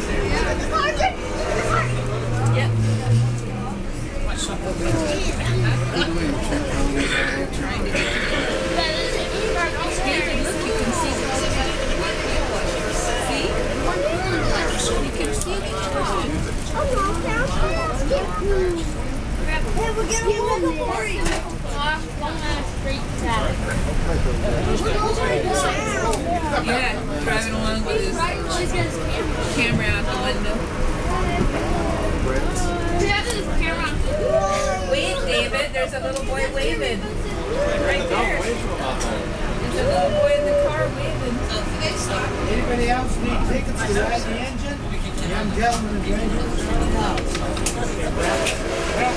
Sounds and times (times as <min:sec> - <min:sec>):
Vehicle: 0:00.0 - 0:49.1.